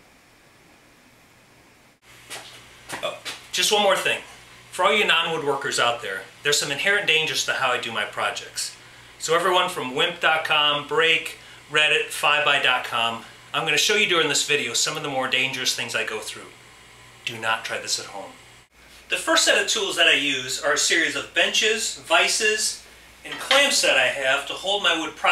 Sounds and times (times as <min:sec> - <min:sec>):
Speech: 0:03.0 - 0:16.6, 0:17.2 - 0:18.4, 0:19.1 - 0:25.3.